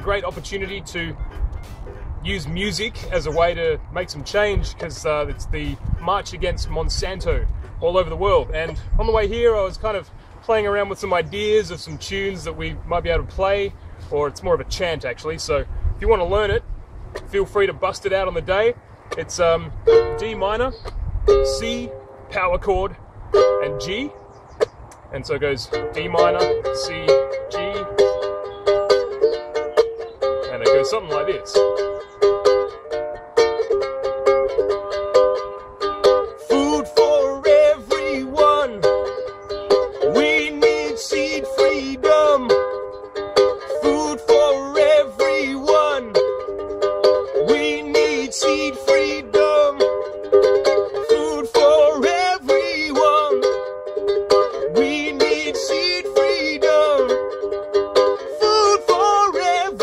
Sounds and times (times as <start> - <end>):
Speech: 0.0 - 1.2, 2.2 - 16.6, 17.3 - 20.8, 21.5 - 23.0, 23.6 - 24.2, 25.1 - 28.0, 30.5 - 31.6
Music: 0.0 - 3.5, 19.8 - 22.3, 23.4 - 24.1, 25.7 - 59.8.